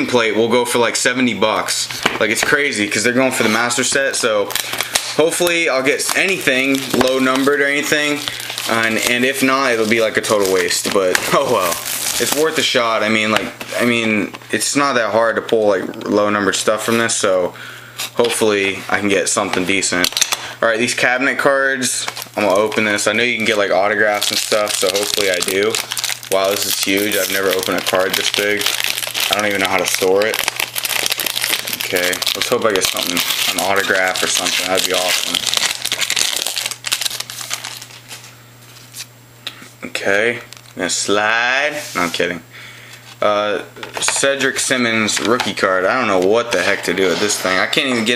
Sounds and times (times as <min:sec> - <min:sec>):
Speech: 0:00.0 - 0:04.6, 0:05.2 - 0:17.6, 0:18.2 - 0:28.7, 0:29.3 - 0:30.5, 0:31.7 - 0:35.4, 0:39.8 - 0:42.5, 0:43.2 - 0:48.1.